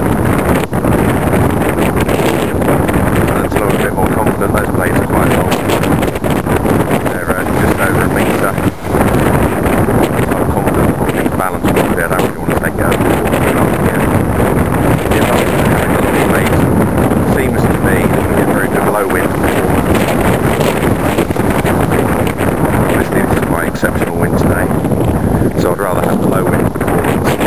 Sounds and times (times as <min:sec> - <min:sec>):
Wind noise (microphone): 0:00.0 - 0:27.4
Speech: 0:03.3 - 0:05.6, 0:07.1 - 0:08.6, 0:10.5 - 0:14.1, 0:15.1 - 0:16.6, 0:17.2 - 0:19.7, 0:22.9 - 0:24.7, 0:25.6 - 0:27.4.